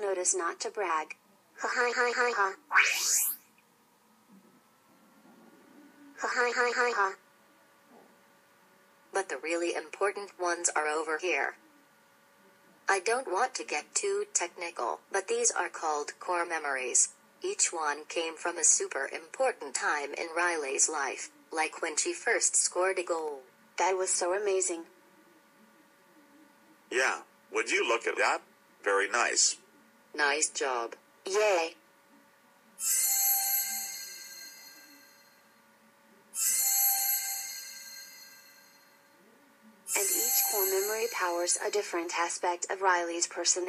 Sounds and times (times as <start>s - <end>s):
Speech: 0.0s - 2.6s, 9.2s - 11.7s, 12.5s - 25.2s, 25.8s - 31.8s, 39.8s - 43.6s.